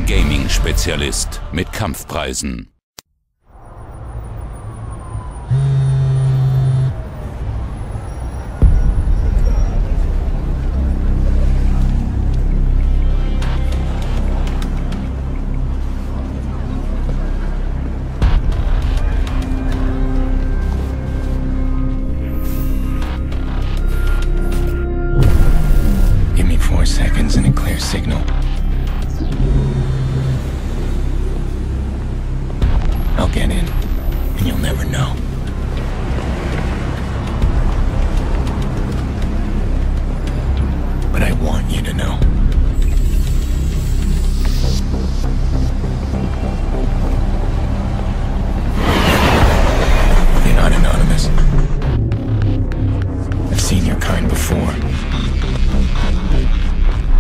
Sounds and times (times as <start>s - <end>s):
Music: 0.0s - 2.5s, 3.6s - 57.2s
Speech: 0.0s - 2.8s, 26.4s - 28.3s, 33.2s - 33.8s, 34.4s - 35.2s, 41.1s - 42.3s, 50.4s - 51.5s, 53.5s - 54.8s.